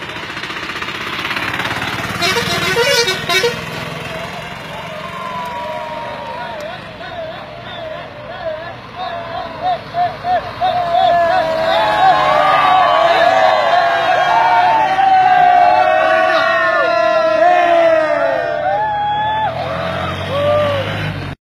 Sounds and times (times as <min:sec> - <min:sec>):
Vehicle: 0:00.0 - 0:21.4.